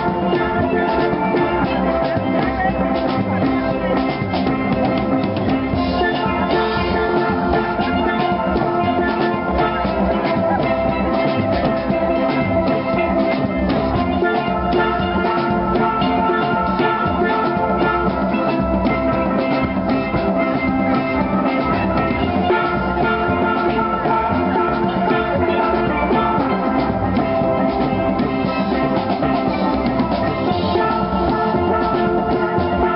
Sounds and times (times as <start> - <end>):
Drum: 0.0 - 32.9
Steelpan: 0.0 - 32.9.